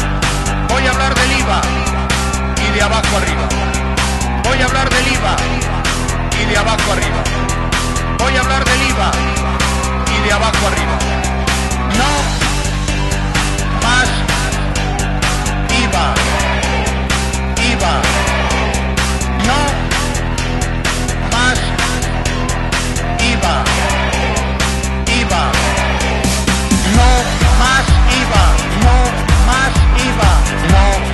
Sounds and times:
Music: 0.0s - 31.1s
Speech: 0.7s - 1.8s, 2.6s - 3.6s, 4.5s - 5.6s, 6.4s - 7.2s, 8.2s - 9.4s, 10.1s - 11.0s, 11.9s - 12.3s, 13.8s - 14.3s, 19.4s - 19.8s, 21.3s - 22.0s.

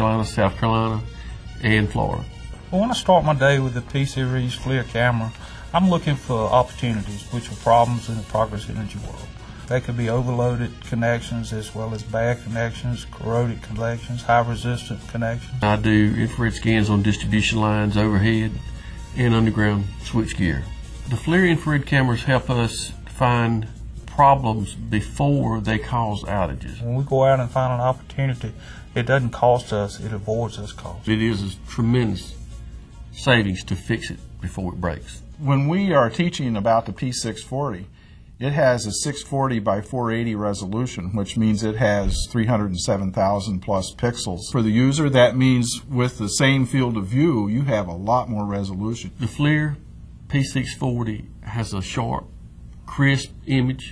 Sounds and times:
Speech: 0.0s - 32.5s, 33.1s - 53.9s
Music: 0.0s - 47.8s.

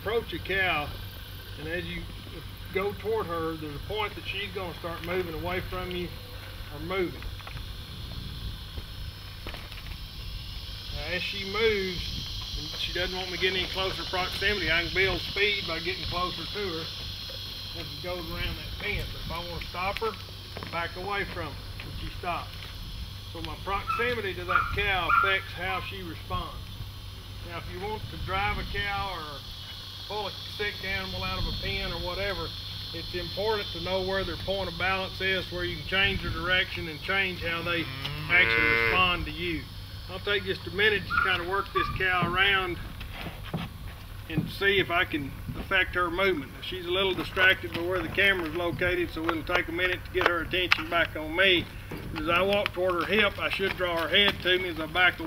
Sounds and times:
Speech: 0.0s - 1.0s, 1.6s - 2.1s, 2.7s - 7.3s, 11.0s - 16.9s, 17.8s - 22.5s, 23.4s - 26.6s, 27.4s - 29.4s, 30.1s - 42.8s, 44.3s - 55.2s.

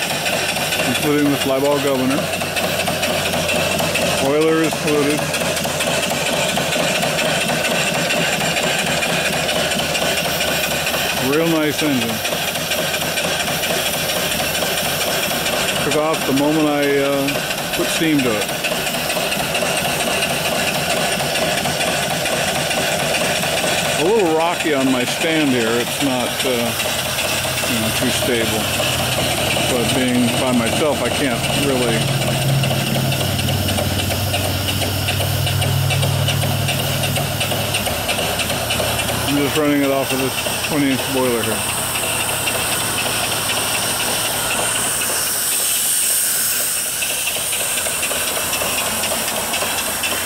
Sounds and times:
Engine: 0.0s - 50.2s
Speech: 0.8s - 2.3s, 4.2s - 5.2s, 11.2s - 12.3s, 15.8s - 18.5s, 24.0s - 26.8s, 27.6s - 28.8s, 29.6s - 32.1s, 39.3s - 41.6s.

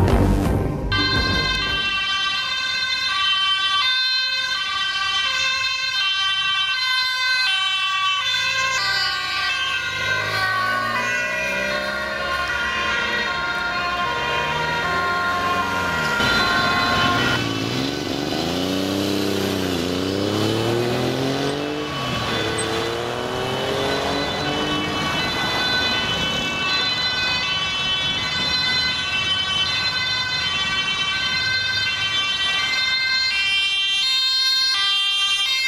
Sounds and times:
Vehicle: 3.2s - 35.6s.

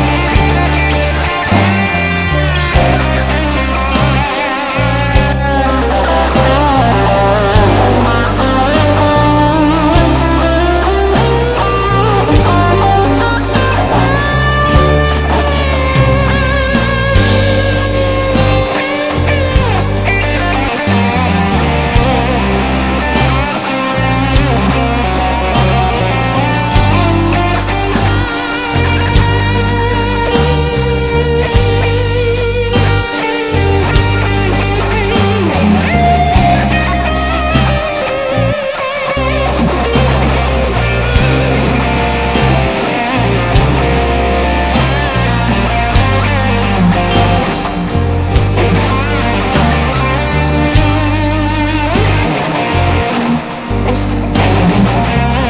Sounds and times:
Guitar: 0.0s - 55.4s
Progressive rock: 0.0s - 55.4s.

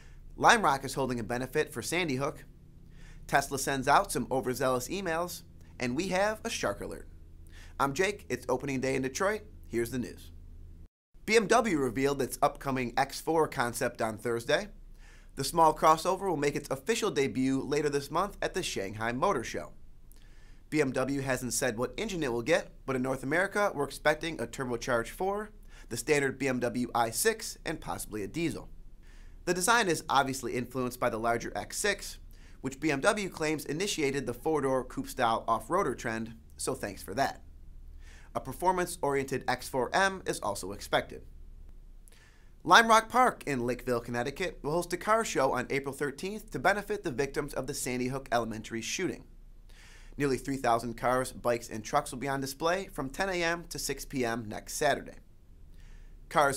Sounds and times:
Speech: 0.4s - 2.5s, 3.3s - 7.1s, 7.8s - 10.3s, 11.3s - 14.8s, 15.4s - 19.8s, 20.7s - 28.7s, 29.5s - 37.5s, 38.3s - 41.3s, 42.6s - 49.3s, 50.2s - 55.3s, 56.3s - 56.5s.

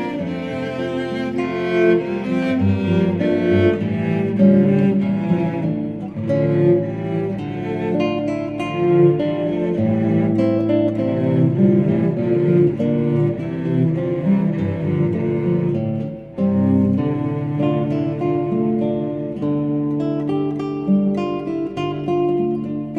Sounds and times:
Double bass: 0.0s - 8.0s, 8.8s - 15.8s
Classical music: 0.0s - 22.9s
Guitar: 0.0s - 22.9s.

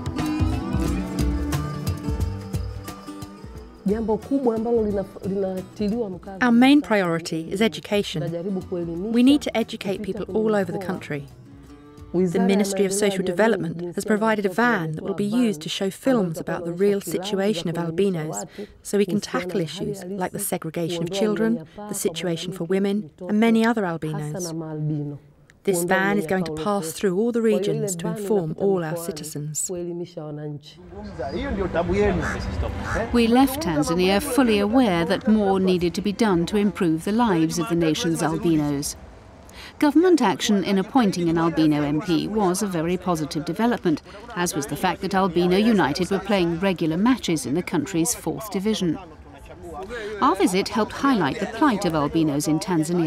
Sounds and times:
Speech: 3.9s - 11.3s, 12.2s - 39.0s, 39.8s - 53.0s.

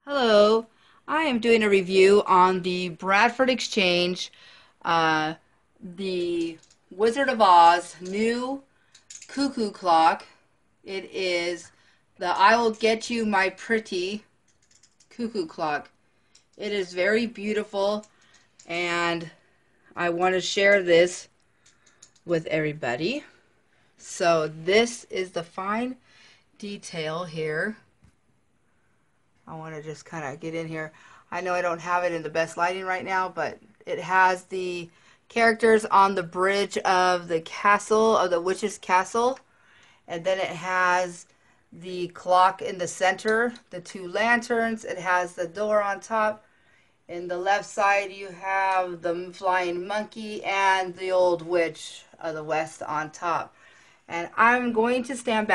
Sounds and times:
Speech: 0.0s - 8.7s, 9.3s - 14.3s, 15.2s - 16.0s, 16.6s - 18.1s, 18.7s - 19.4s, 20.0s - 21.3s, 22.3s - 23.4s, 24.0s - 26.0s, 26.6s - 27.9s, 29.5s - 39.4s, 40.1s - 46.4s, 47.1s - 53.5s, 54.1s - 55.5s.

